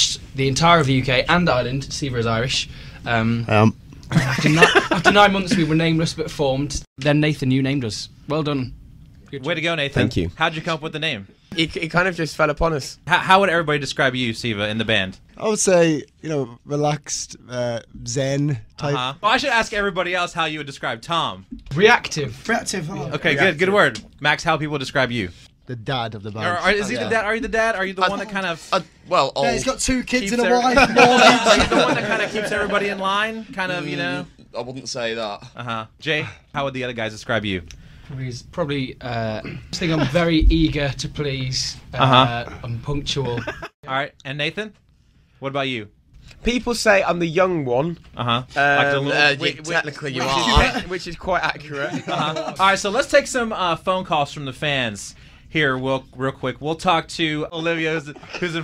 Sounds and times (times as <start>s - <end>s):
Speech: 9.3s - 44.8s, 45.4s - 58.6s.